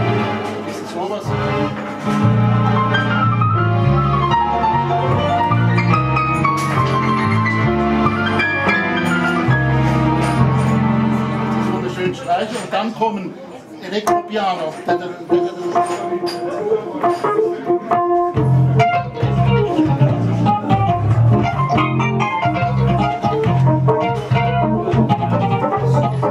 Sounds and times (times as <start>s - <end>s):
Music: 0.0s - 12.7s, 13.9s - 26.3s
Speech: 0.7s - 1.6s, 11.8s - 17.8s.